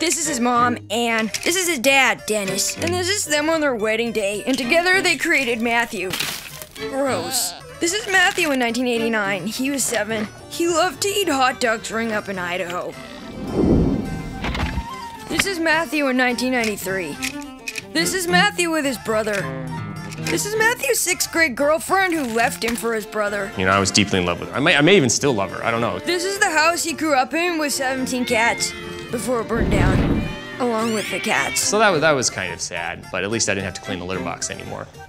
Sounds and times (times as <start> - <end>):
Music: 0.0 - 35.0
Speech: 7.0 - 12.9, 29.2 - 34.9.